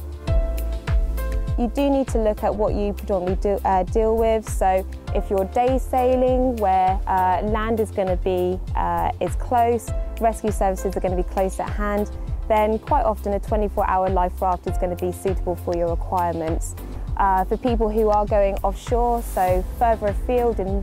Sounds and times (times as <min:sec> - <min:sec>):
Music: 0:00.0 - 0:20.8
Speech: 0:01.6 - 0:20.8.